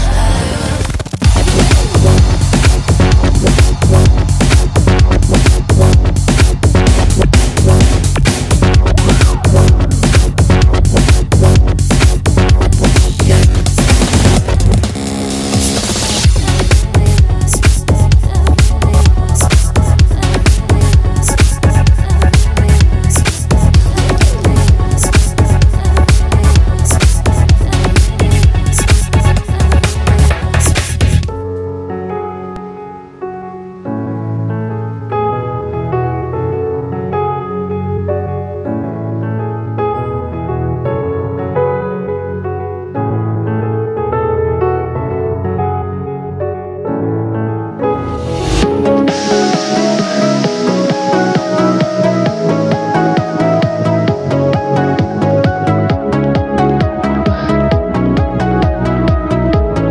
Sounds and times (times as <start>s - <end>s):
Electronic dance music: 0.0s - 31.3s, 47.9s - 59.9s
Trance music: 0.0s - 31.3s, 47.8s - 59.9s
House music: 0.0s - 31.4s, 47.8s - 59.9s
Electronica: 0.0s - 39.8s, 47.7s - 59.9s.